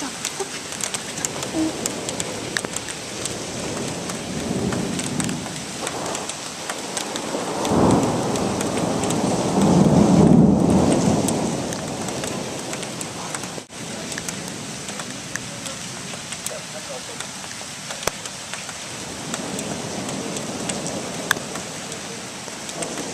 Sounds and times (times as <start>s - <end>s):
Rain on surface: 0.0s - 23.1s
Raindrop: 0.0s - 23.1s
Thunder: 1.4s - 13.0s.